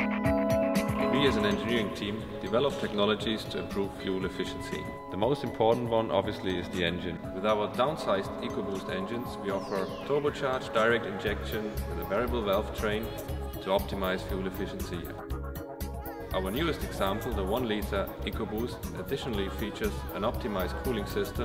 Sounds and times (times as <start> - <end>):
Music: 0.0 - 21.4
Speech: 1.0 - 15.2, 16.3 - 21.4.